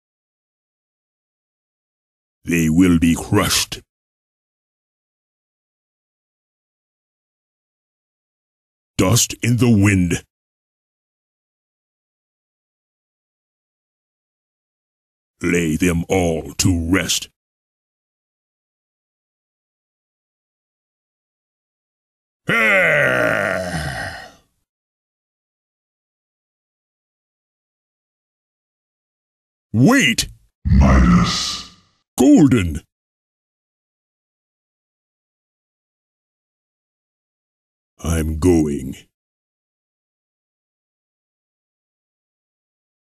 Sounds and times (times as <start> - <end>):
Speech: 2.5 - 3.9, 9.0 - 10.3, 15.4 - 17.4, 22.5 - 24.4, 29.8 - 32.9, 38.0 - 39.1.